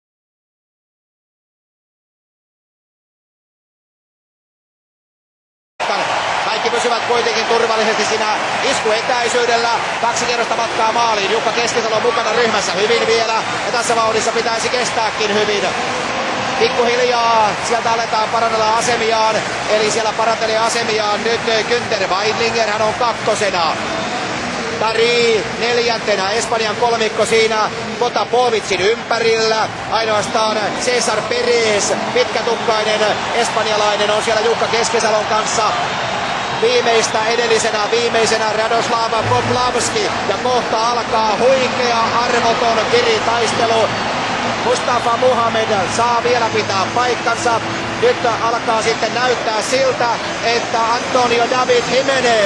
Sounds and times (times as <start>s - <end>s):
Speech: 5.8s - 15.8s, 16.6s - 23.8s, 24.8s - 35.8s, 36.6s - 44.0s, 44.6s - 52.4s.